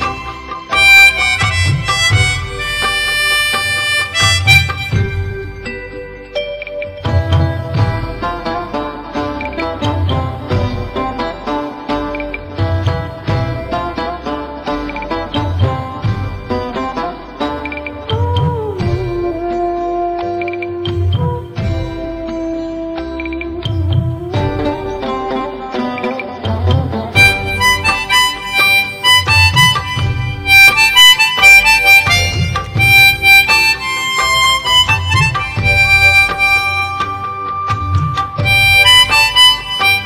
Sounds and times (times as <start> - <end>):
Harmonica: 0.0 - 40.0
Wind instrument, woodwind instrument: 0.0 - 40.0.